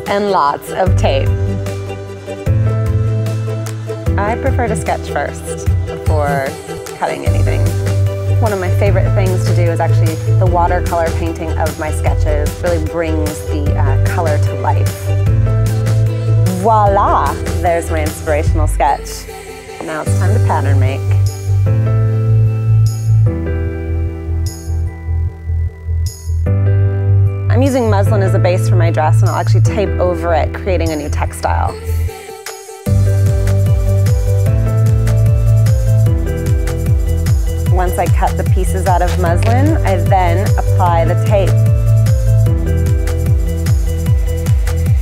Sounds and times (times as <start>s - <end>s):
Speech: 0.0s - 1.3s, 4.2s - 7.7s, 16.5s - 21.2s, 27.5s - 31.8s, 37.7s - 41.6s
Music: 0.0s - 45.0s.